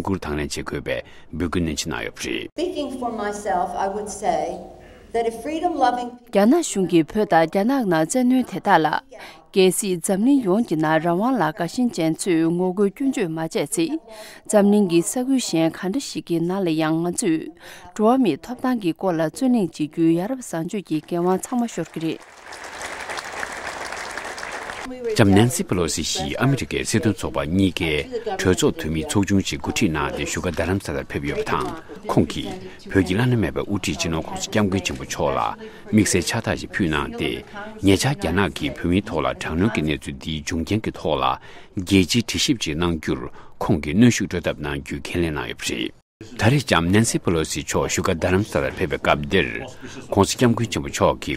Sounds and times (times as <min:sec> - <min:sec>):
Narration, monologue: 0:00.0 - 0:22.8, 0:24.9 - 0:51.3
Female speech, woman speaking: 0:02.6 - 0:22.2, 0:24.9 - 0:40.1.